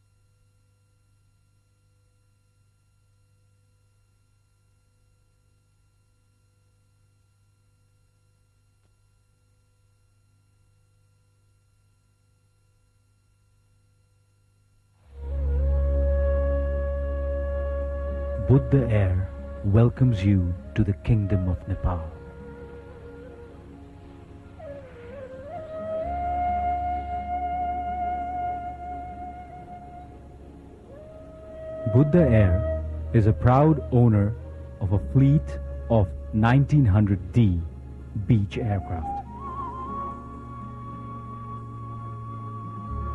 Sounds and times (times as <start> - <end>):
Music: 15.0 - 43.1
Speech: 18.4 - 22.2, 31.9 - 39.2.